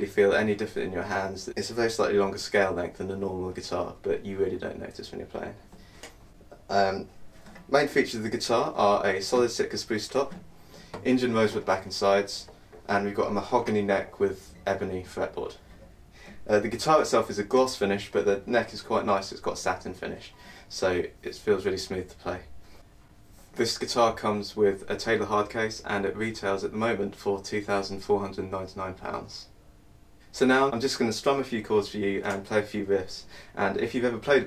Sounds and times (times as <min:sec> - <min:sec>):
Speech: 0:00.0 - 0:05.7, 0:06.6 - 0:10.4, 0:11.0 - 0:15.6, 0:16.4 - 0:22.5, 0:23.5 - 0:29.6, 0:30.3 - 0:34.4.